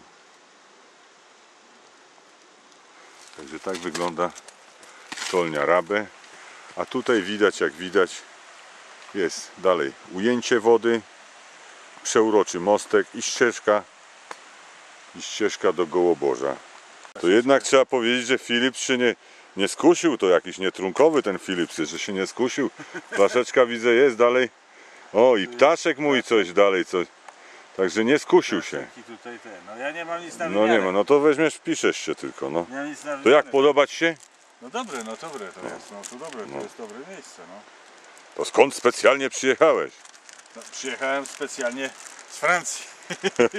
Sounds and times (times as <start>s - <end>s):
Outside, rural or natural: 0.0s - 43.5s
Speech: 3.4s - 4.4s, 5.3s - 6.1s, 9.1s - 11.1s, 12.0s - 13.9s, 15.2s - 16.6s, 17.2s - 24.5s, 25.1s - 27.1s, 27.8s - 37.7s, 38.4s - 42.9s.